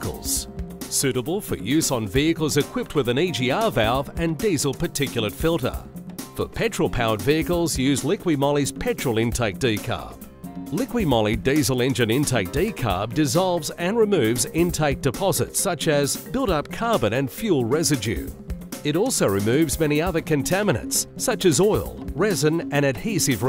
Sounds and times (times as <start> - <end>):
Speech: 0.0 - 18.3, 18.9 - 23.4
Music: 0.0 - 23.4.